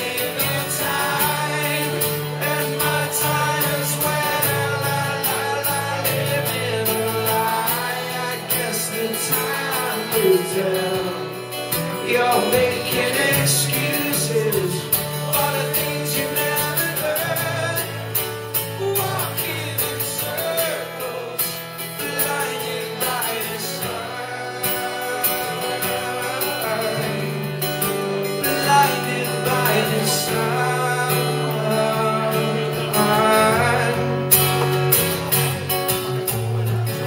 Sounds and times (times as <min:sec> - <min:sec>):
Singing: 0:00.0 - 0:34.7
Country: 0:00.0 - 0:37.0
Guitar: 0:00.0 - 0:37.0.